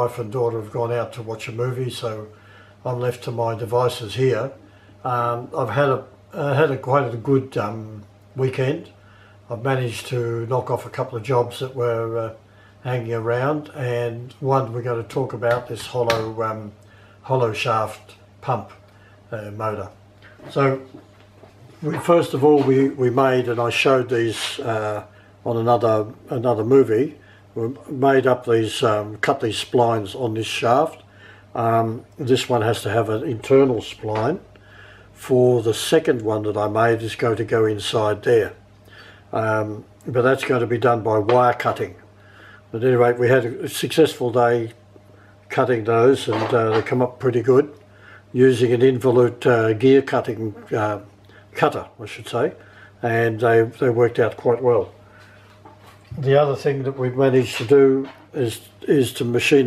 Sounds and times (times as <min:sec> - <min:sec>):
Speech: 0:00.0 - 0:21.0, 0:21.8 - 0:34.5, 0:35.2 - 0:38.6, 0:39.3 - 0:42.0, 0:42.7 - 0:44.8, 0:45.5 - 0:55.0, 0:56.1 - 0:59.6.